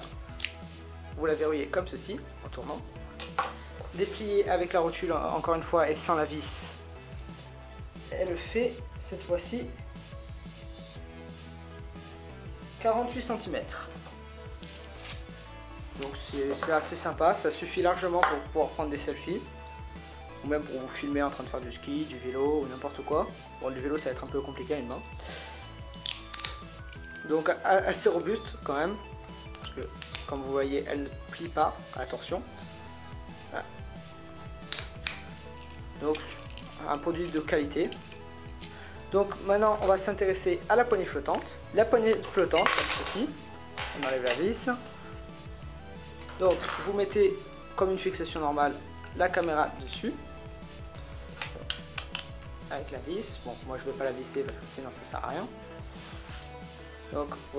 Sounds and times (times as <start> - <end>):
Music: 0.0 - 57.5
Speech: 1.2 - 2.8, 4.0 - 6.8, 8.1 - 9.8, 12.8 - 14.0, 16.0 - 19.5, 20.4 - 25.0, 27.2 - 29.0, 29.7 - 32.5, 33.5 - 33.8, 36.0 - 38.0, 39.1 - 44.8, 46.4 - 50.2, 52.7 - 55.5, 57.1 - 57.5.